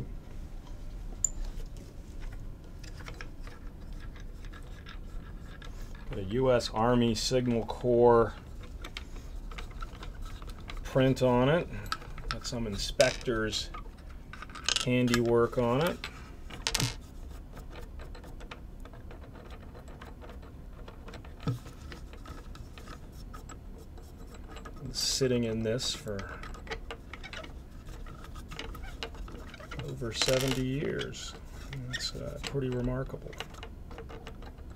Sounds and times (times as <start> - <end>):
Speech: 6.1 - 8.4, 10.9 - 11.8, 12.4 - 13.8, 14.8 - 16.0, 24.8 - 26.4, 29.8 - 33.4.